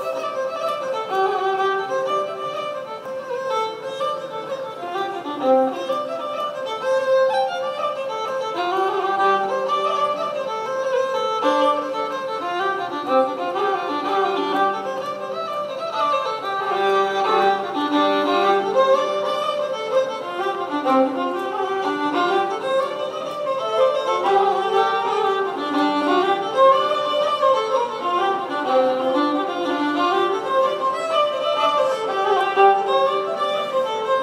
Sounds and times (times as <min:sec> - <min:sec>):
Violin, fiddle: 0:00.0 - 0:34.2.